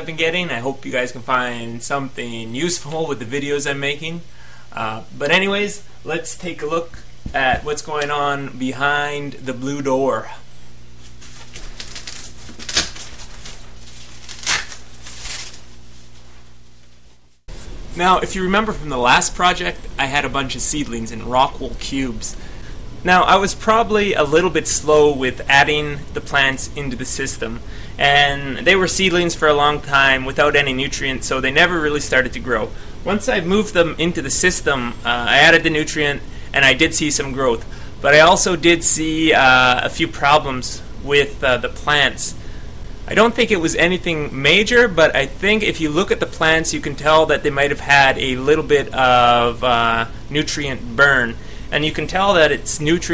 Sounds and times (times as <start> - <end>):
Speech: 0.0 - 10.5, 18.0 - 22.4, 23.0 - 42.4, 43.1 - 53.1.